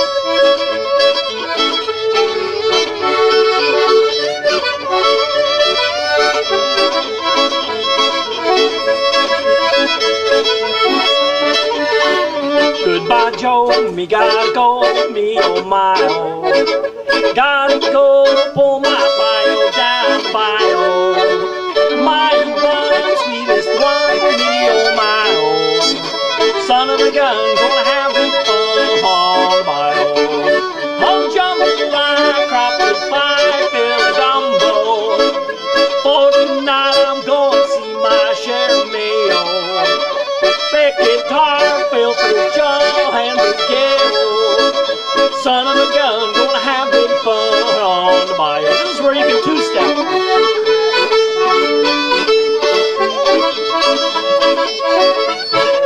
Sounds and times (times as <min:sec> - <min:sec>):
Violin, fiddle: 0:00.0 - 0:55.8.